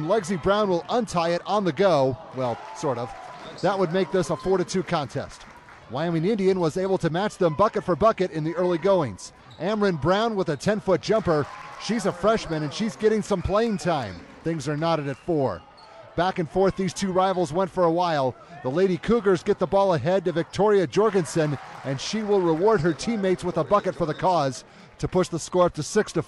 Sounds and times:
Speech: 0.0s - 15.6s, 16.2s - 26.2s.

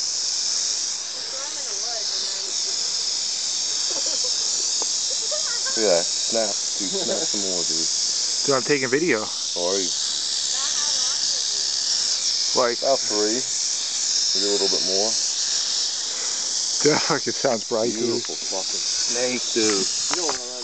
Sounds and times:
Speech: 12.6s - 13.5s, 16.8s - 20.6s.

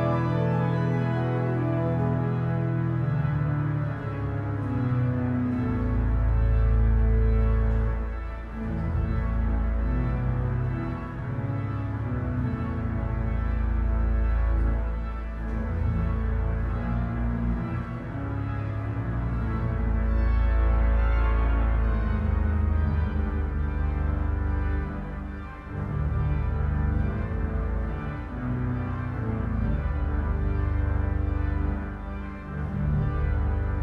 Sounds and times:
Music: 0.0s - 33.8s.

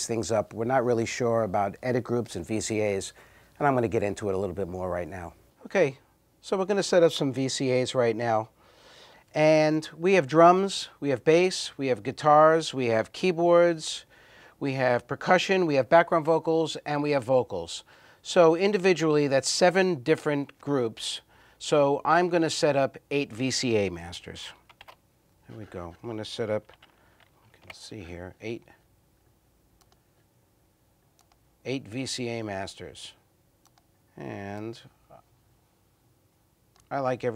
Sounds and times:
Speech: 0.0s - 8.5s, 9.3s - 24.6s, 25.5s - 26.7s, 27.6s - 28.8s, 31.6s - 33.2s, 34.2s - 35.2s, 36.9s - 37.3s.

